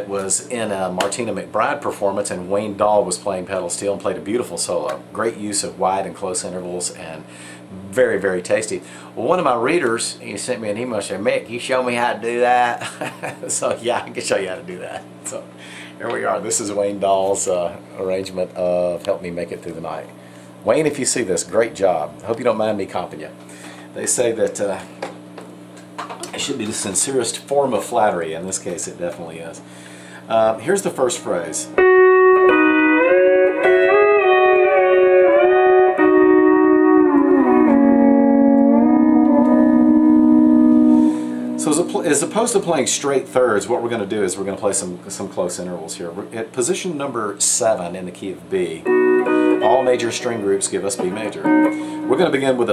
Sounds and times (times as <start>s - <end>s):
Speech: 0.0s - 23.4s, 24.0s - 24.9s, 26.2s - 29.7s, 30.3s - 31.8s, 41.6s - 48.9s, 49.6s - 52.7s.